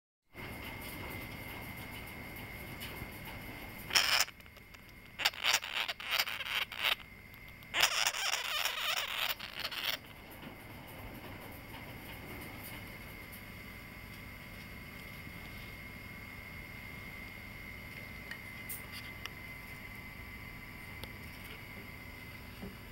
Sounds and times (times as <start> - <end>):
Animal: 0.4 - 12.8.